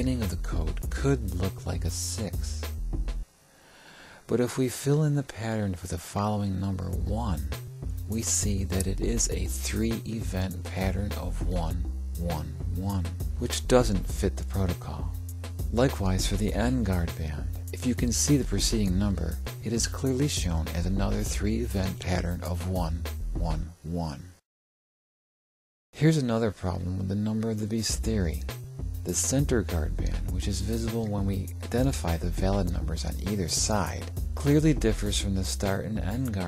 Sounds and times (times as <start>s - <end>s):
Music: 0.0s - 3.4s, 5.5s - 24.4s, 26.0s - 36.4s.